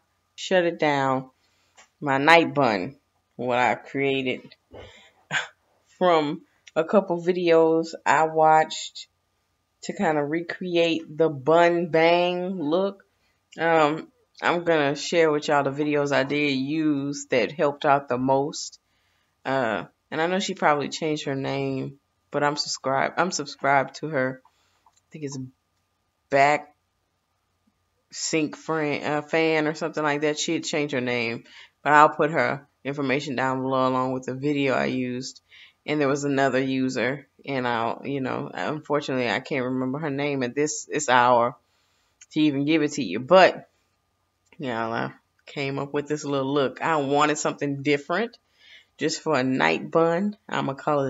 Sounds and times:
Speech: 0.4 - 1.3, 2.0 - 4.6, 5.3 - 9.1, 9.8 - 13.0, 13.6 - 18.8, 19.5 - 24.4, 25.2 - 25.6, 26.3 - 26.7, 28.2 - 41.6, 42.2 - 43.7, 44.6 - 48.4, 49.0 - 51.1.

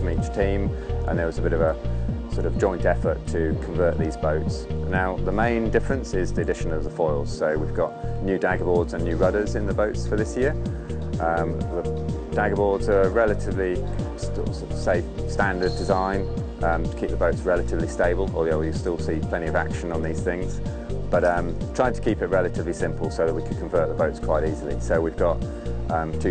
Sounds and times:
Speech: 0.0 - 10.6, 11.2 - 26.3
Music: 0.0 - 26.3.

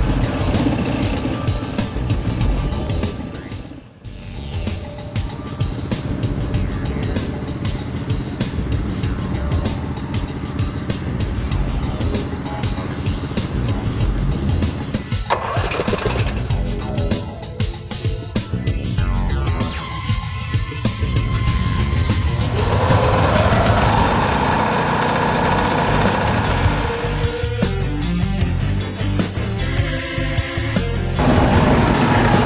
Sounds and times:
Music: 0.0 - 24.5, 25.2 - 32.4.

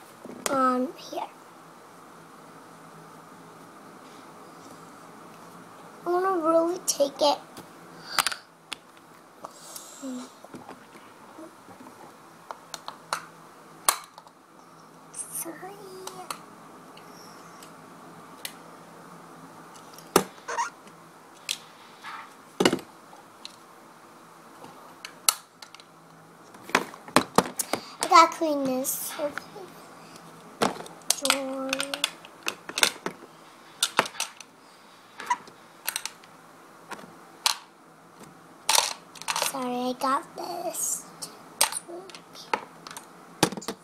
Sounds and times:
Child speech, kid speaking: 0.5 - 1.4, 6.1 - 7.4, 10.0 - 10.4, 15.2 - 16.4, 28.0 - 29.8, 31.2 - 32.1, 39.4 - 42.6.

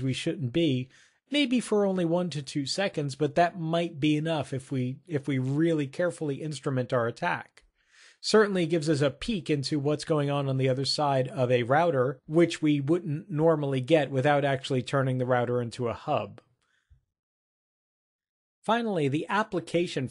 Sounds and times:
Speech: 0.0 - 7.6, 8.2 - 16.5, 18.7 - 20.1.

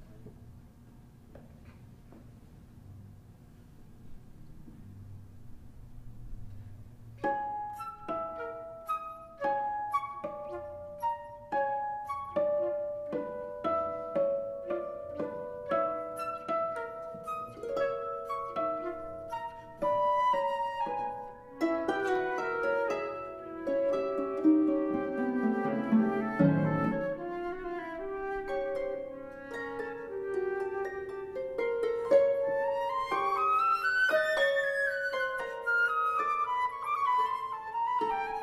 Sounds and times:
Pizzicato: 4.1 - 38.4
Harp: 6.5 - 38.4.

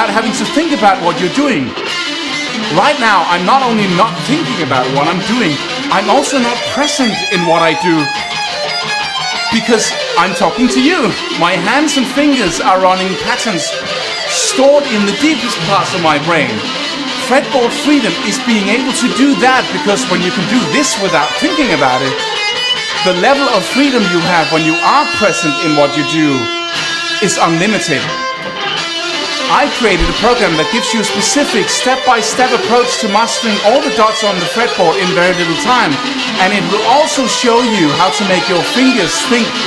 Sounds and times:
Speech: 0.0 - 1.8, 2.6 - 8.2, 9.5 - 22.2, 23.0 - 26.5, 27.2 - 28.1, 29.5 - 39.6
Strum: 14.9 - 39.6.

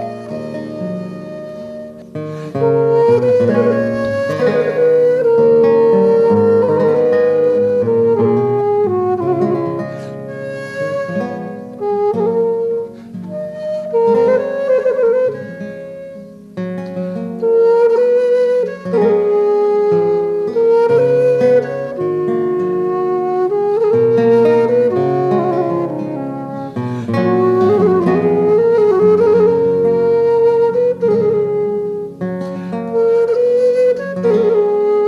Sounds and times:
Classical music: 0.0 - 35.0
Flute: 0.0 - 35.0
Plucked string instrument: 0.0 - 35.0.

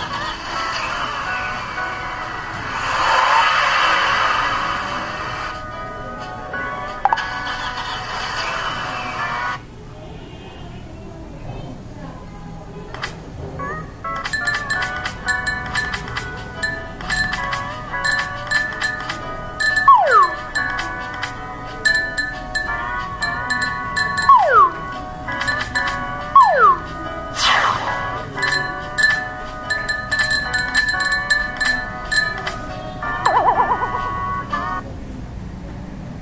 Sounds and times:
Music: 0.0 - 9.6, 12.7 - 34.8.

